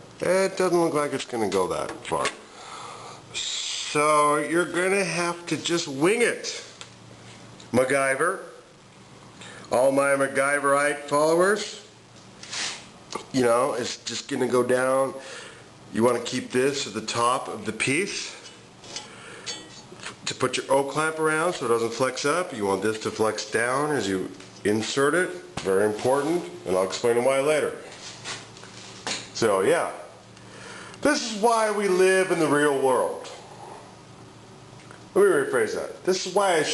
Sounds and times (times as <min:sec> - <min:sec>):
Speech: 0:00.2 - 0:02.4, 0:03.4 - 0:06.8, 0:07.7 - 0:08.6, 0:09.7 - 0:12.0, 0:13.2 - 0:15.2, 0:15.9 - 0:18.5, 0:20.2 - 0:27.9, 0:29.4 - 0:30.2, 0:31.0 - 0:33.4, 0:35.2 - 0:36.7.